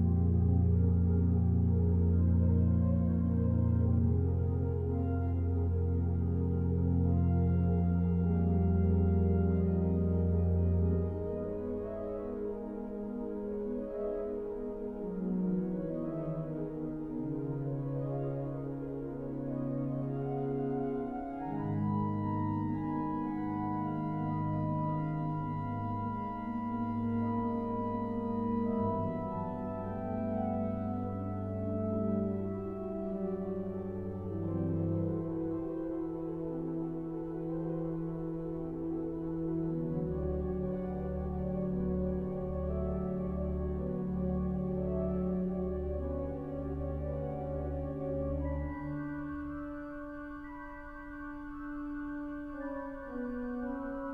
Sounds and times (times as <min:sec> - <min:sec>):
Hammond organ: 0:00.0 - 0:54.1.